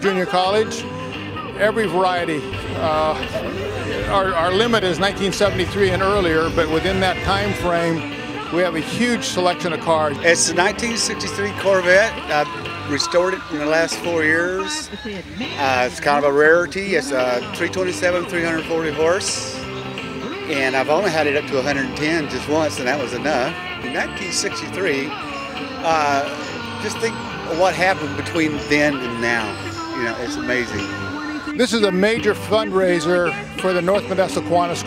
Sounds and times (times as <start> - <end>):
Speech: 0.0 - 0.8, 1.6 - 19.6, 20.5 - 25.1, 25.8 - 30.9, 31.5 - 34.8
Music: 0.0 - 34.8.